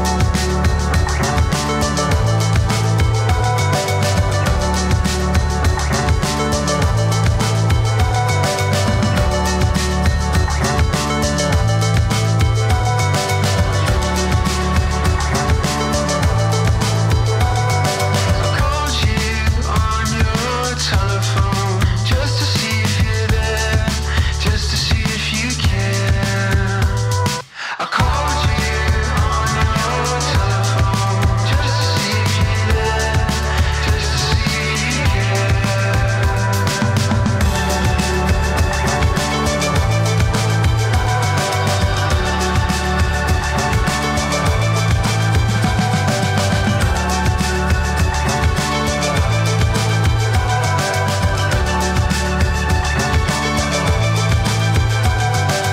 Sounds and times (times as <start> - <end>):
Music: 0.0 - 55.7.